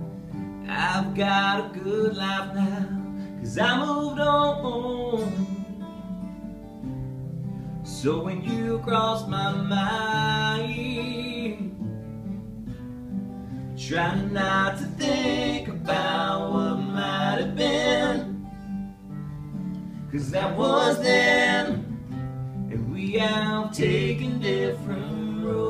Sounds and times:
Music: 0:00.0 - 0:25.6
Male singing: 0:00.7 - 0:05.7, 0:07.9 - 0:11.7, 0:13.8 - 0:18.4, 0:20.2 - 0:21.8, 0:22.7 - 0:25.6.

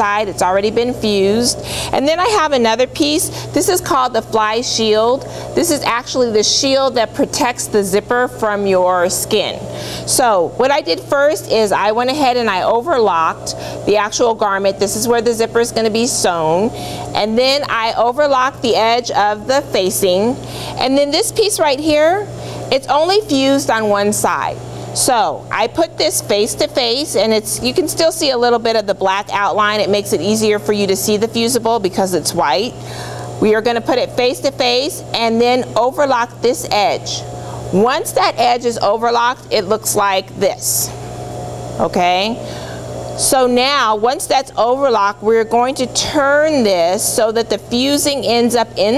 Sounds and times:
Speech: 0:00.0 - 0:32.8, 0:41.8 - 0:42.4, 0:43.2 - 0:48.9.

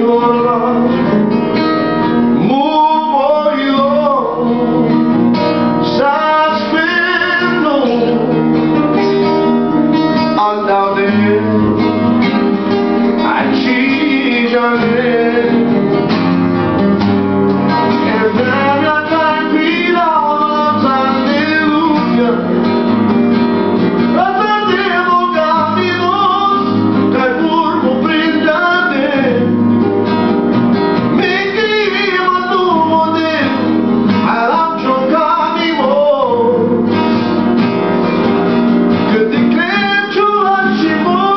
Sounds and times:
Male singing: 0:00.0 - 0:01.1, 0:02.4 - 0:05.1, 0:05.8 - 0:08.4, 0:10.4 - 0:11.9, 0:13.2 - 0:15.8, 0:18.0 - 0:22.6, 0:24.2 - 0:29.5, 0:31.2 - 0:36.9, 0:39.1 - 0:41.3
Music: 0:00.0 - 0:41.3.

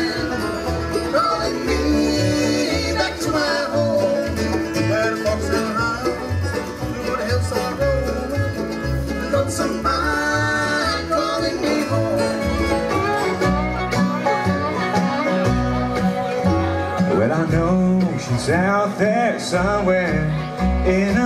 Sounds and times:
Bluegrass: 0:00.0 - 0:21.2
Plucked string instrument: 0:00.0 - 0:21.2.

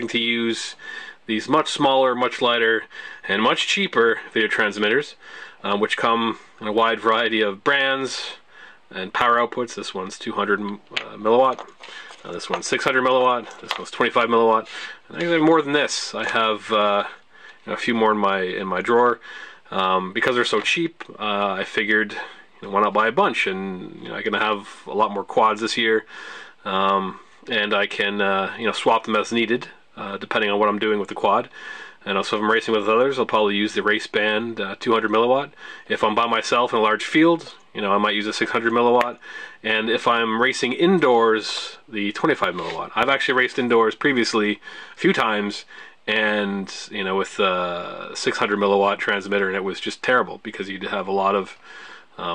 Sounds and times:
Speech: 0:00.0 - 0:51.6.

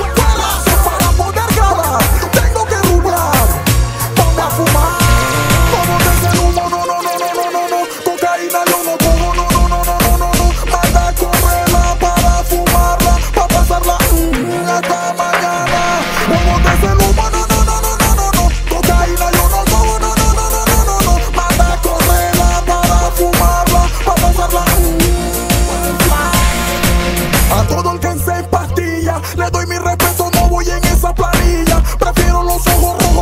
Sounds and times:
Music: 0:00.0 - 0:33.2.

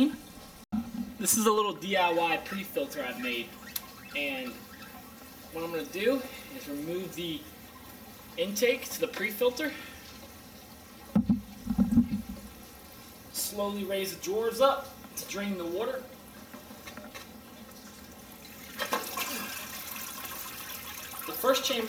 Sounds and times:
Liquid: 0:00.0 - 0:21.8
Water: 0:00.0 - 0:21.8
Speech: 0:01.2 - 0:03.6, 0:04.2 - 0:04.6, 0:05.5 - 0:07.5, 0:08.4 - 0:09.9, 0:13.3 - 0:16.1, 0:21.3 - 0:21.8.

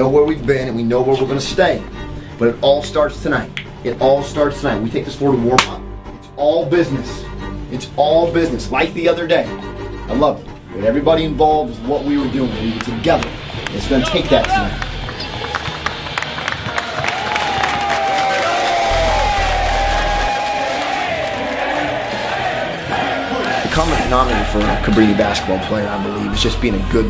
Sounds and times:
Speech: 0:00.0 - 0:09.5, 0:10.1 - 0:14.8, 0:23.7 - 0:27.0
Music: 0:00.0 - 0:27.0.

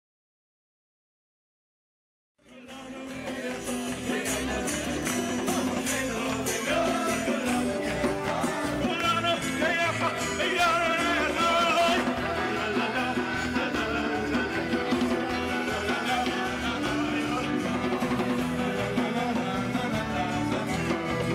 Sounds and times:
Choir: 0:02.4 - 0:21.3
Male singing: 0:02.4 - 0:21.3.

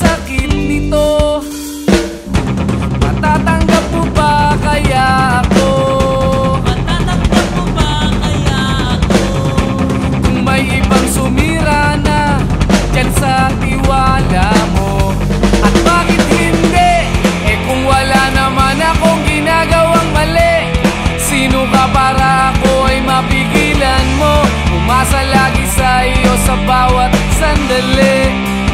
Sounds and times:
Rock music: 0:00.0 - 0:28.7.

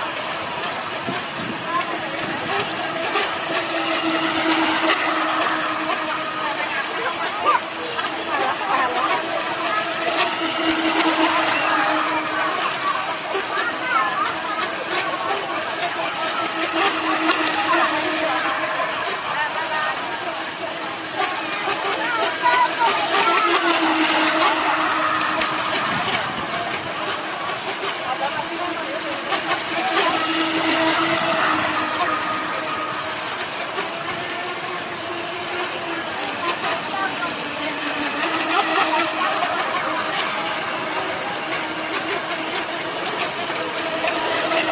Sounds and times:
Vehicle: 0:00.0 - 0:44.7
Speech: 0:00.2 - 0:04.0, 0:04.7 - 0:44.7.

